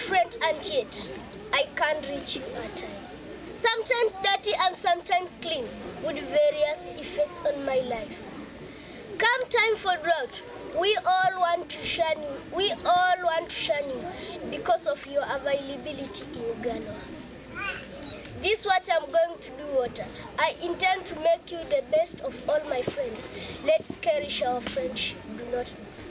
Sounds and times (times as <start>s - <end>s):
Speech: 0.0s - 8.5s, 9.2s - 26.1s.